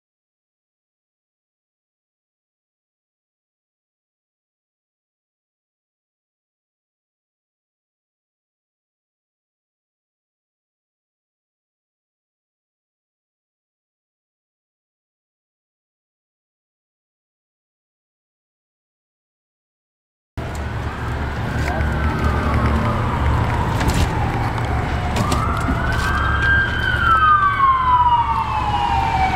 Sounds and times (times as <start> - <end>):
Vehicle: 20.4 - 29.3
Speech: 21.6 - 22.1.